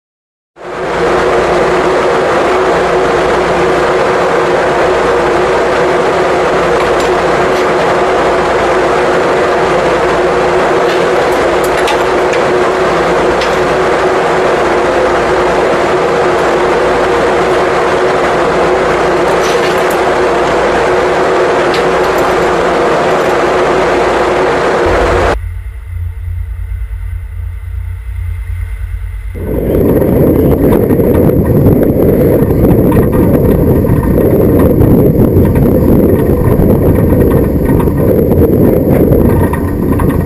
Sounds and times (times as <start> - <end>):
Boat, Water vehicle: 0.6 - 25.4, 29.4 - 40.2
Wind noise (microphone): 29.4 - 40.2.